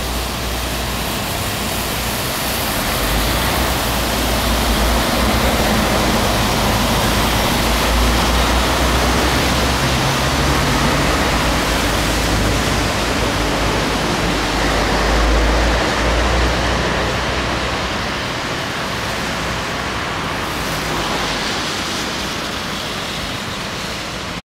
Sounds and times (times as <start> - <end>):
Bus: 0.0 - 24.4.